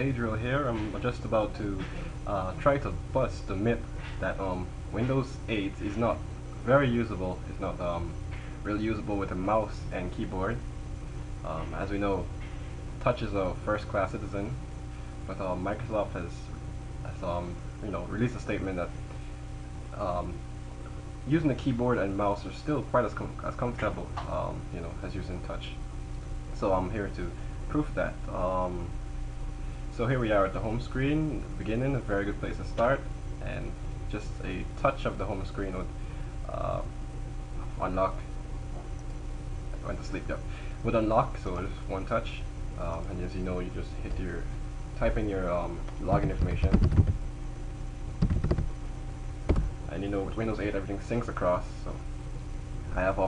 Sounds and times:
Speech: 0:00.0 - 0:10.7, 0:11.4 - 0:12.4, 0:13.0 - 0:19.0, 0:19.9 - 0:20.5, 0:21.2 - 0:25.8, 0:26.6 - 0:29.0, 0:29.9 - 0:37.0, 0:37.6 - 0:38.9, 0:39.7 - 0:46.9, 0:49.9 - 0:52.1, 0:52.9 - 0:53.2.

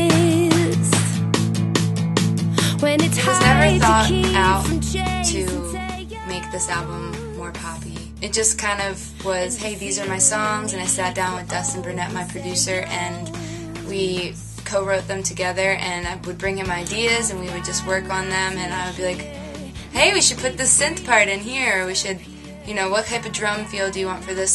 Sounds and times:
Music: 0:00.0 - 0:24.5
Speech: 0:02.6 - 0:19.3, 0:20.0 - 0:24.5.

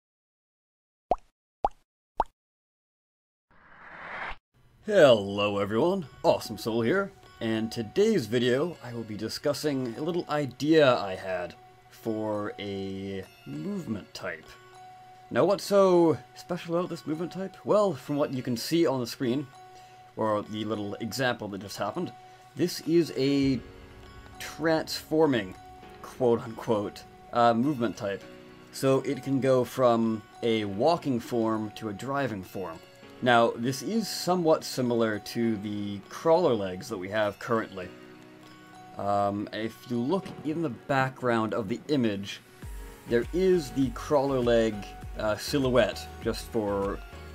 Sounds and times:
Music: 0:04.8 - 0:47.3
Speech: 0:04.9 - 0:14.6, 0:15.3 - 0:19.5, 0:20.2 - 0:23.6, 0:24.4 - 0:37.9, 0:39.0 - 0:42.4, 0:43.1 - 0:47.0.

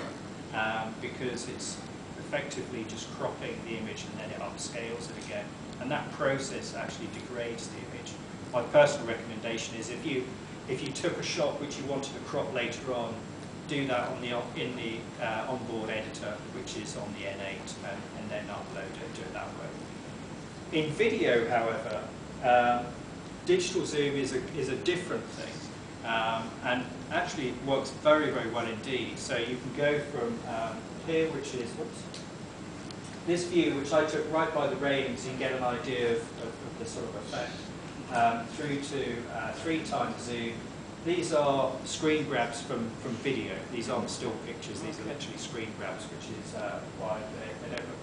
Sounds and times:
Speech: 0:00.0 - 0:19.8, 0:20.7 - 0:32.2, 0:33.3 - 0:48.0.

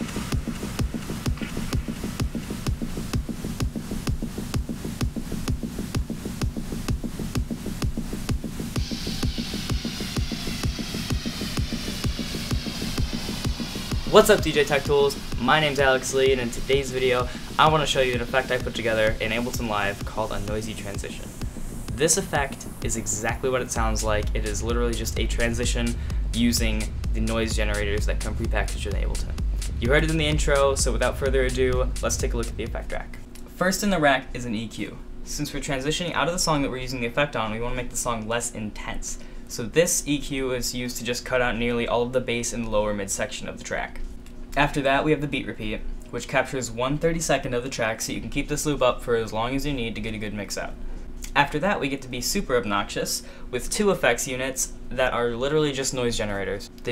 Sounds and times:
Music: 0:00.0 - 0:33.5
Speech: 0:14.1 - 0:44.0, 0:44.6 - 0:56.9.

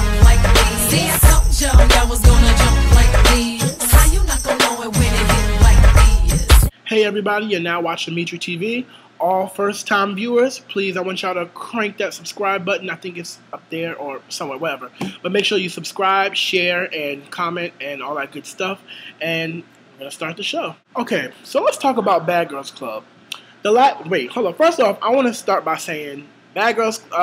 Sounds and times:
Speech: 0:06.9 - 0:27.2.

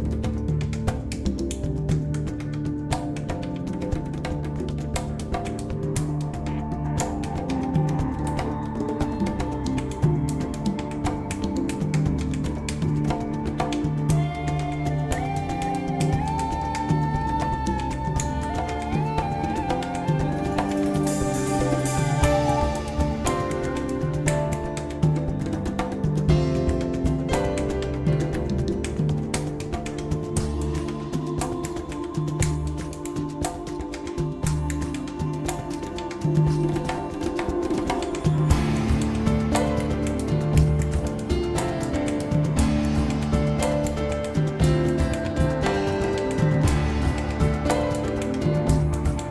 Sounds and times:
Percussion: 0:00.0 - 0:49.3.

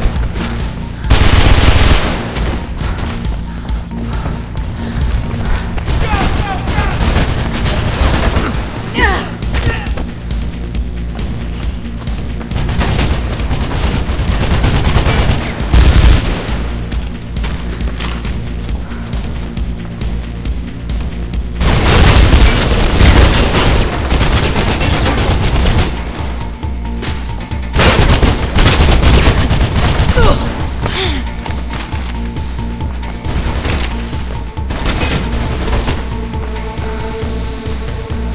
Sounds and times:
Music: 0:00.0 - 0:38.3.

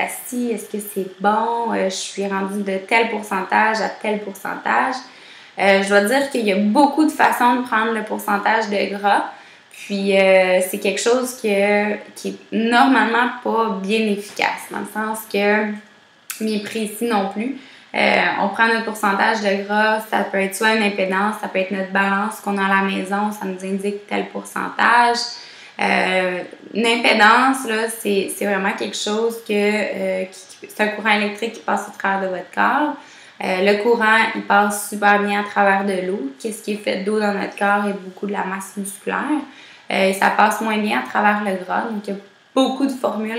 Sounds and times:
Speech: 0:00.0 - 0:43.3.

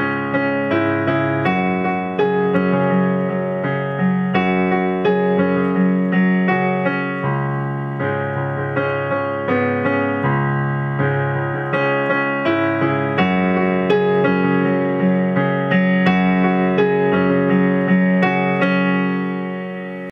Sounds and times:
Music: 0:00.0 - 0:20.1.

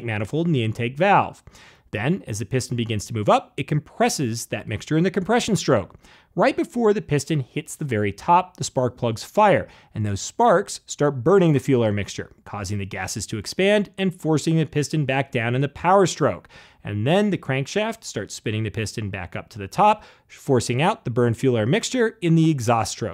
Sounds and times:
Speech: 0:00.0 - 0:23.1.

